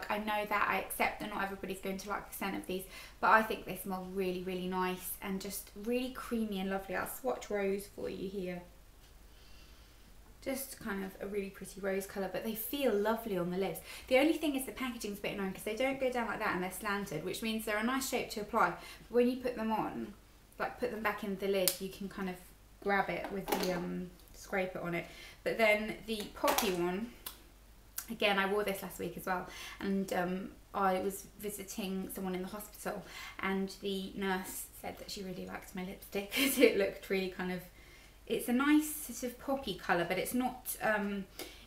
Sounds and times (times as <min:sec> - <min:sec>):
Speech: 0:00.0 - 0:08.7, 0:10.4 - 0:27.2, 0:28.0 - 0:37.7, 0:38.3 - 0:41.3
Inside, small room: 0:00.0 - 0:41.6.